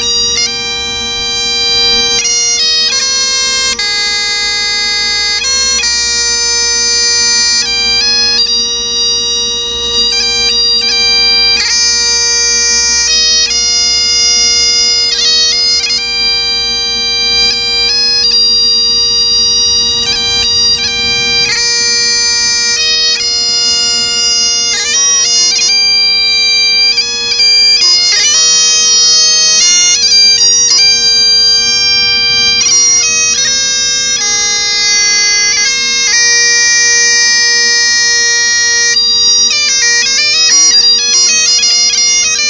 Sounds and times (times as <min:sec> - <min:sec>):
Bagpipes: 0:00.0 - 0:42.4.